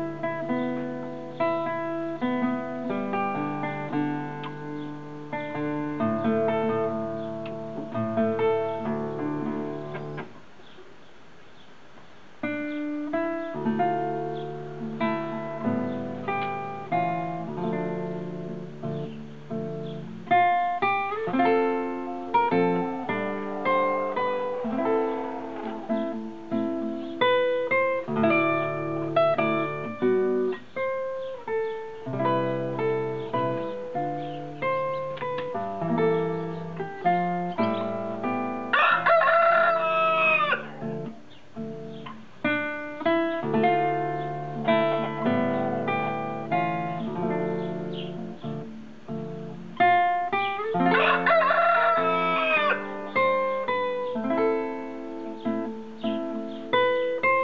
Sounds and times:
Strum: 12.4s - 39.1s, 40.0s - 51.3s.

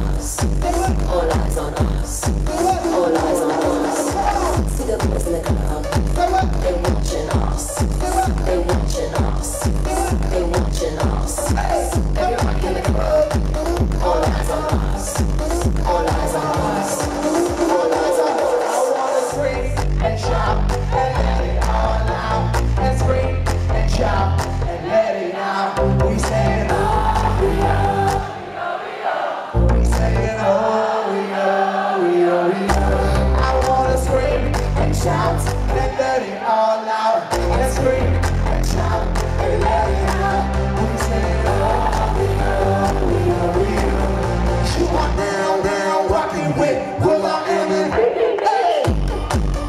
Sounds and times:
Music: 0.0s - 49.6s.

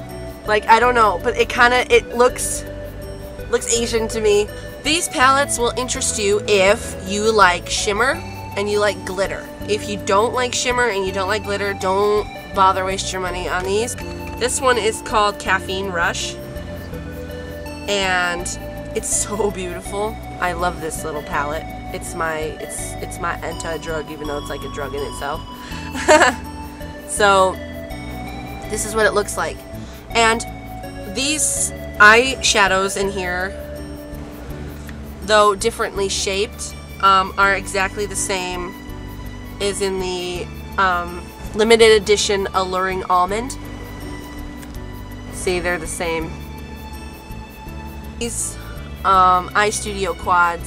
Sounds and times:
Music: 0.0s - 50.6s
Speech: 0.5s - 2.6s, 3.5s - 16.4s, 17.9s - 26.4s, 27.1s - 27.6s, 28.7s - 29.6s, 30.2s - 30.4s, 31.1s - 33.6s, 35.2s - 38.7s, 39.6s - 43.6s, 45.4s - 46.3s, 48.2s - 50.6s.

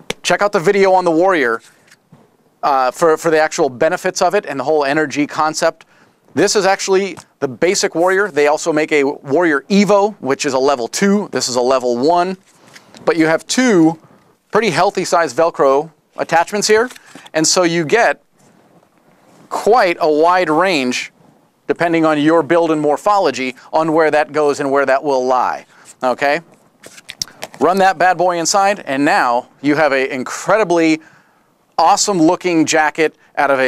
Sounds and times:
Speech: 0.2s - 1.6s, 2.6s - 5.8s, 6.4s - 12.4s, 13.0s - 18.2s, 19.5s - 21.1s, 21.7s - 26.4s, 27.6s - 31.0s, 31.8s - 33.6s.

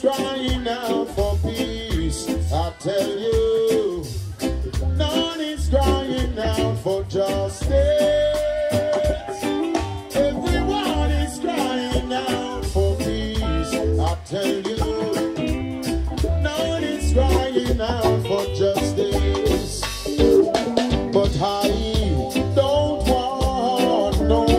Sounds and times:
Singing: 0.0s - 15.6s, 16.4s - 19.9s, 21.1s - 24.5s
Reggae: 0.0s - 24.5s.

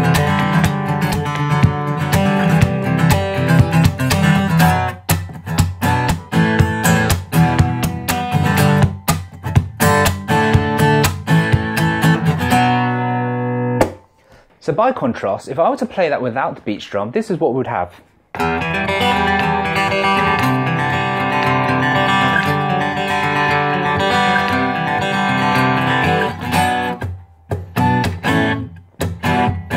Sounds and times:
Guitar: 0.0s - 29.7s
Speech: 14.6s - 18.1s.

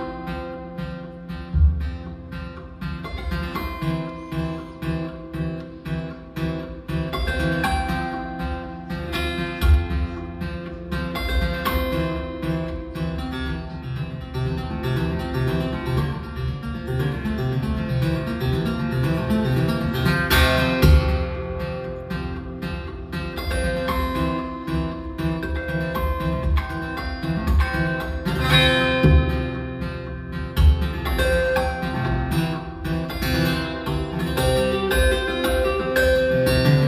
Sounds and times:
Flamenco: 0.0s - 36.8s.

